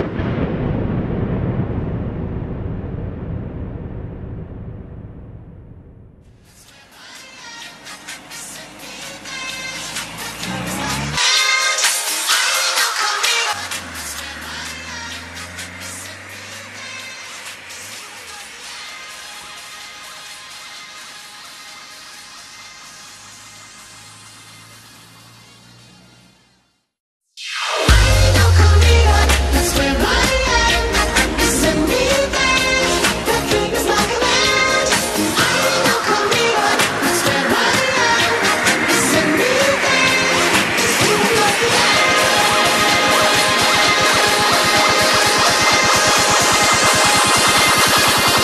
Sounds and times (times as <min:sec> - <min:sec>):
Music: 0:06.4 - 0:24.4, 0:27.6 - 0:48.4.